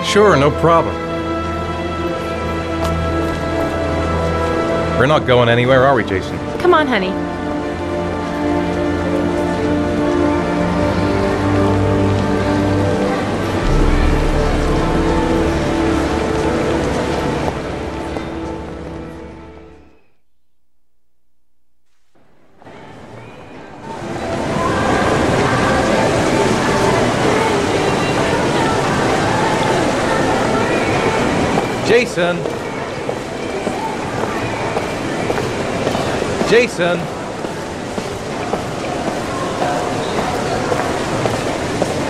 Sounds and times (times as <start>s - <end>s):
Music: 0.0s - 20.2s, 22.6s - 36.5s.